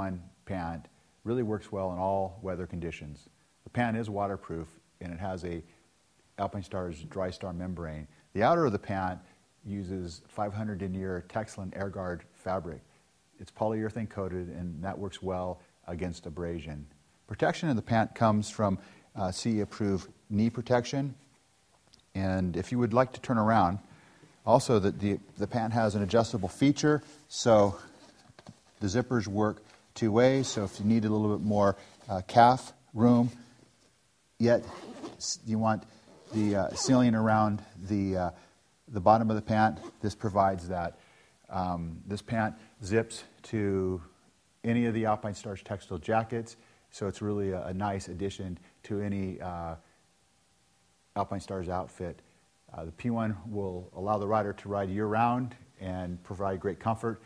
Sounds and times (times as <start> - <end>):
Speech: 0.0 - 5.7, 6.4 - 21.3, 22.1 - 28.0, 28.8 - 33.5, 34.4 - 49.9, 51.1 - 57.2.